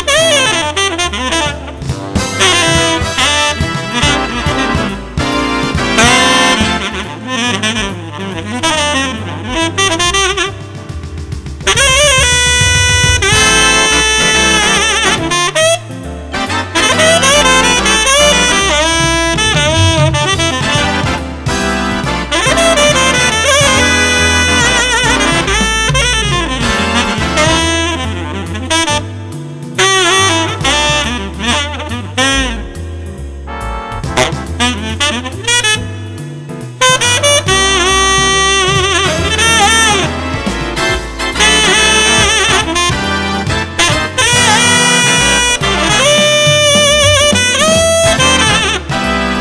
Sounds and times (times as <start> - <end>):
Wind instrument, woodwind instrument: 0.0 - 49.4.